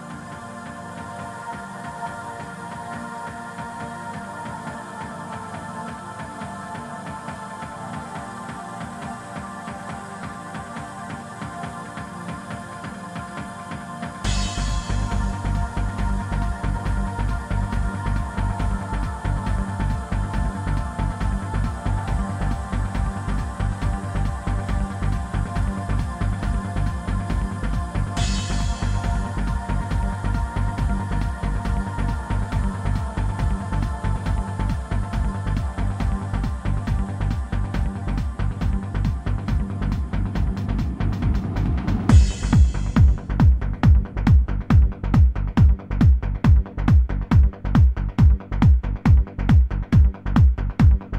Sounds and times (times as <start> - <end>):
Music: 0.0 - 51.1.